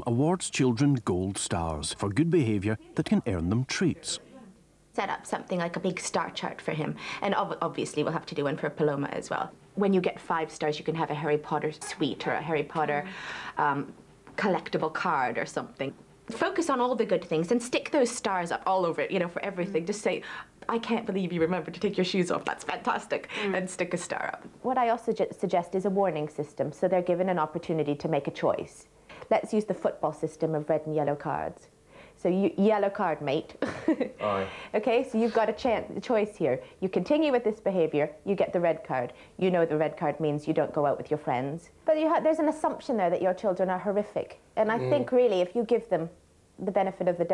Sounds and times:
Speech: 0.0 - 33.5, 34.2 - 47.3.

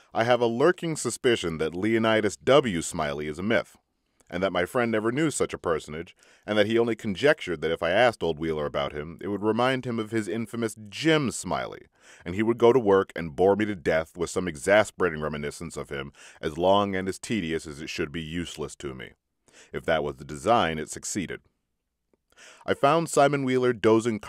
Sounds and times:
Speech: 0.0 - 21.4, 22.6 - 24.2.

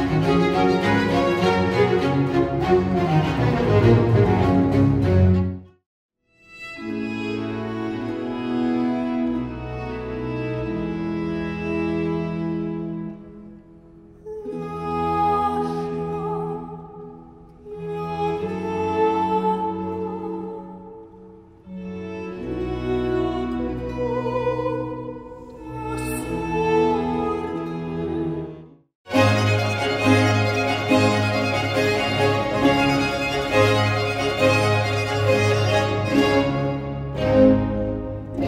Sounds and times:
Music: 0.0 - 38.4.

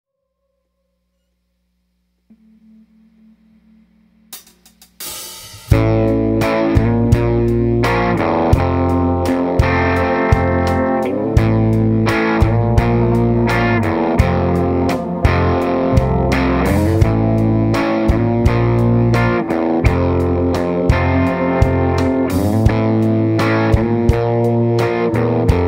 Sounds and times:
Music: 2.3 - 25.6.

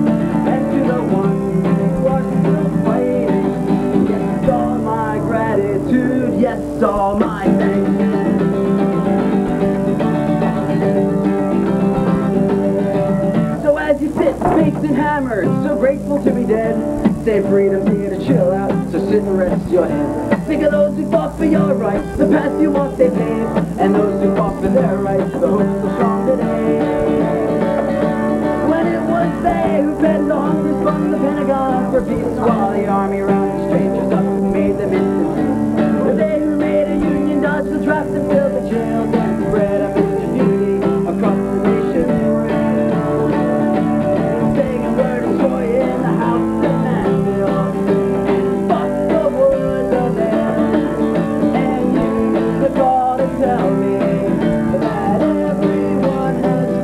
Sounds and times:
Bluegrass: 0.0 - 56.8
Guitar: 0.0 - 56.8
Singing: 0.0 - 56.8.

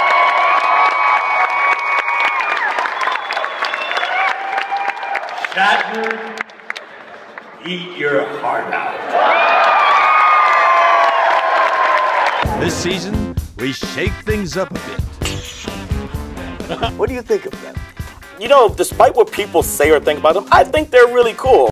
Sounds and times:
Male speech, man speaking: 5.4 - 6.4, 7.6 - 9.0, 12.6 - 15.0, 16.8 - 17.7, 18.4 - 21.7
Music: 12.4 - 21.7
Conversation: 16.0 - 21.1.

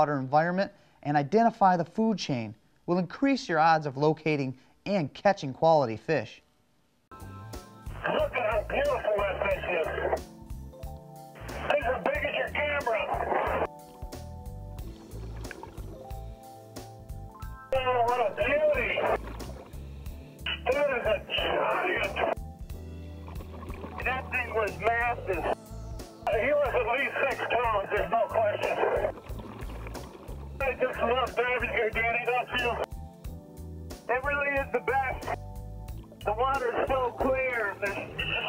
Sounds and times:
Speech: 0.0 - 6.4, 8.0 - 10.2, 11.6 - 13.7, 17.8 - 19.2, 20.5 - 22.4, 24.0 - 25.6, 26.3 - 29.1, 30.6 - 32.9, 34.1 - 35.4, 36.2 - 38.4
Music: 7.1 - 38.4
Water: 14.8 - 16.4, 18.6 - 20.2, 23.0 - 24.3, 28.6 - 30.7, 35.9 - 36.3.

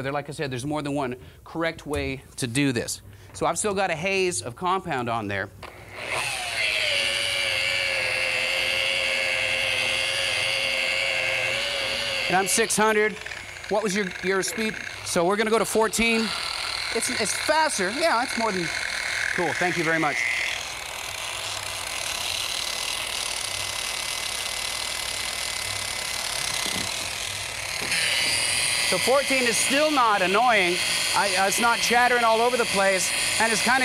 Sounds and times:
Speech: 0.0 - 5.5, 12.3 - 16.3, 19.4 - 20.2, 29.0 - 33.8.

